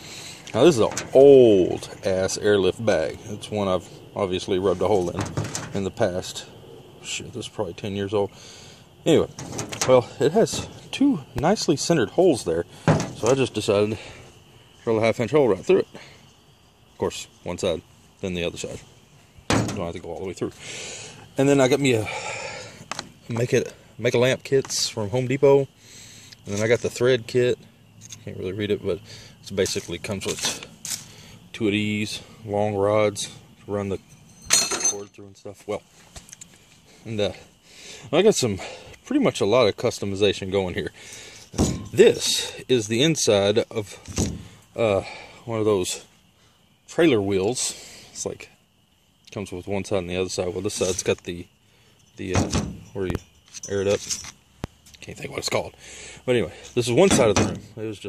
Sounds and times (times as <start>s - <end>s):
Speech: 0.5s - 8.4s, 9.0s - 14.2s, 14.8s - 16.0s, 17.0s - 18.9s, 19.6s - 20.6s, 21.4s - 22.2s, 23.3s - 25.7s, 26.4s - 27.6s, 28.2s - 30.7s, 31.5s - 34.0s, 34.8s - 35.9s, 37.0s - 37.5s, 38.1s - 41.0s, 41.9s - 44.1s, 44.8s - 46.1s, 46.9s - 48.6s, 49.3s - 51.5s, 52.2s - 54.1s, 55.0s - 58.0s.